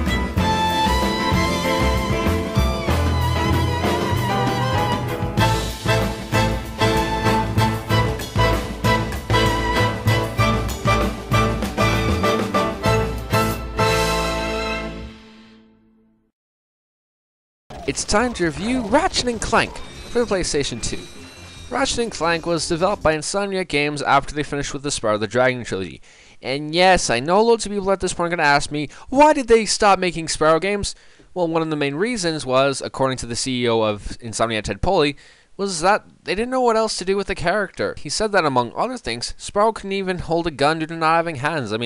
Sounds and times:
Speech: 0:17.8 - 0:41.8.

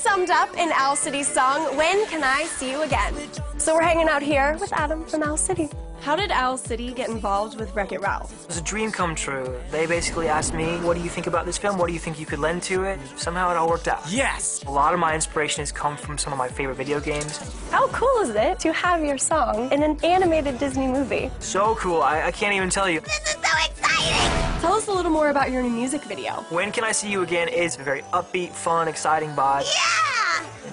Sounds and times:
Music: 0:00.0 - 0:30.7.

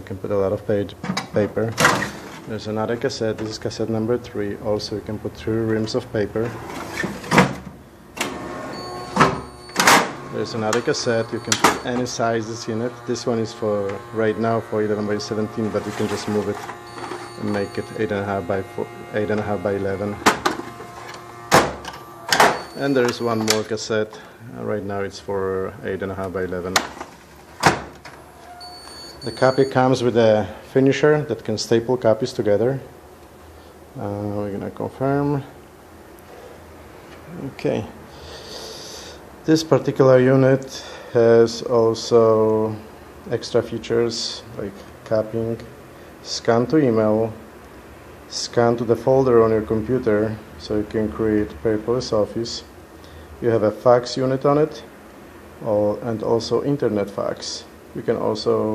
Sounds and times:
Speech: 0:00.0 - 0:01.8, 0:02.5 - 0:06.6, 0:10.3 - 0:16.7, 0:17.4 - 0:20.3, 0:22.8 - 0:26.9, 0:29.2 - 0:32.9, 0:34.0 - 0:35.6, 0:37.3 - 0:38.0, 0:39.4 - 0:47.4, 0:48.3 - 0:52.7, 0:53.4 - 0:54.9, 0:55.6 - 0:58.7
Printer: 0:08.2 - 0:23.7.

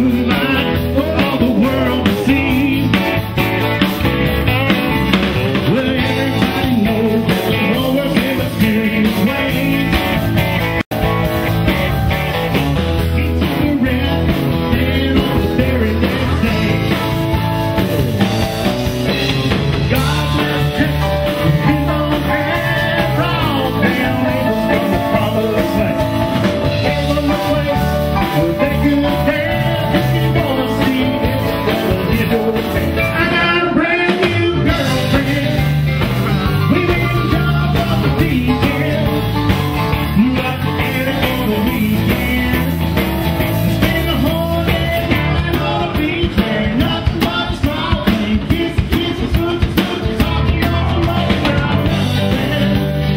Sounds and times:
Country: 0:00.0 - 0:53.1.

